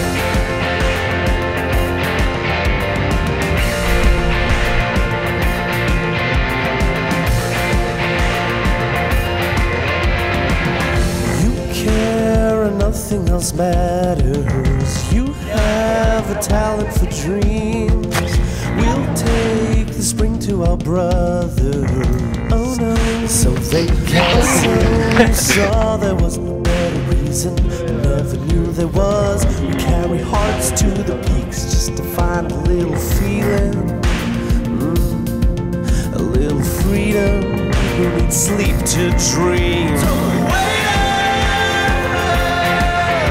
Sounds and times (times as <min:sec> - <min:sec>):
Music: 0:00.0 - 0:43.3.